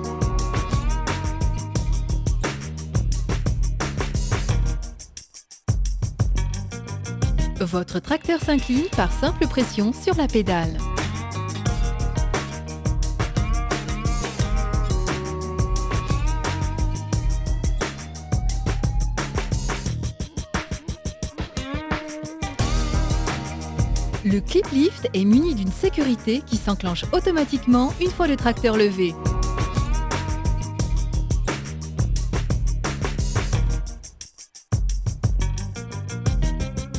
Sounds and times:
Music: 0.0 - 36.9
Speech: 7.6 - 10.8, 24.2 - 29.2.

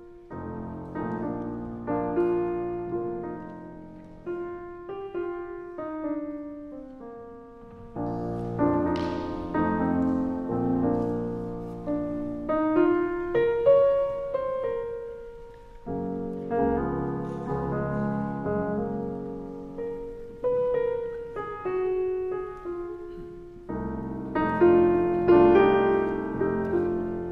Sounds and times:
Soul music: 0.0 - 27.3.

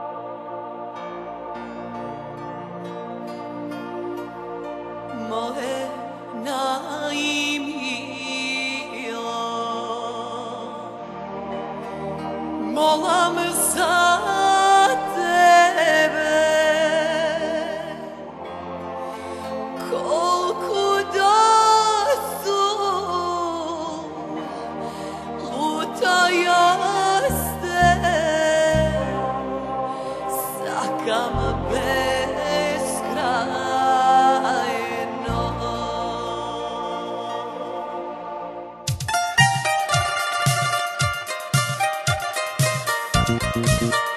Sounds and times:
Music: 0.0 - 44.1.

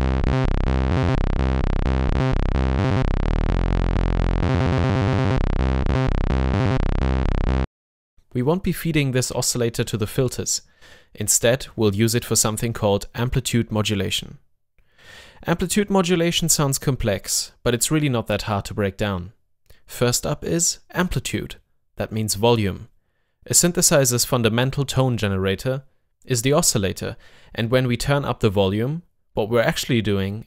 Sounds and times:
Speech: 8.3 - 14.4, 15.4 - 22.9, 23.5 - 30.4.

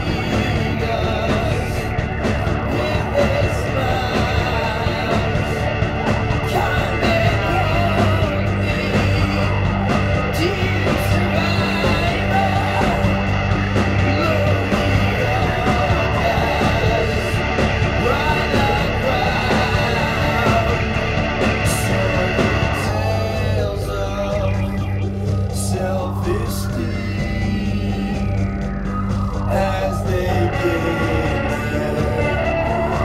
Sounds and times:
Music: 0.0 - 33.0.

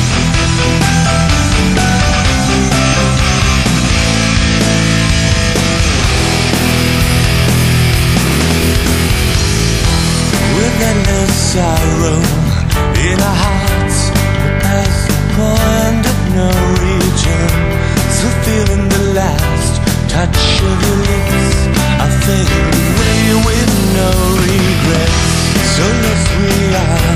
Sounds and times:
Music: 0.0 - 27.1.

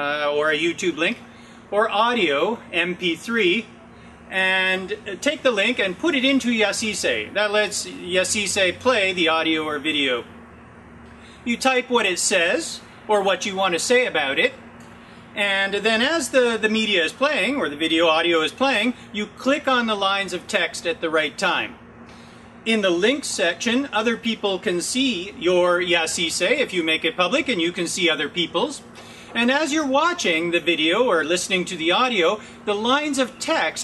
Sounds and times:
Speech: 0.0 - 10.3, 11.4 - 14.6, 15.4 - 21.8, 22.7 - 28.8, 29.4 - 33.8.

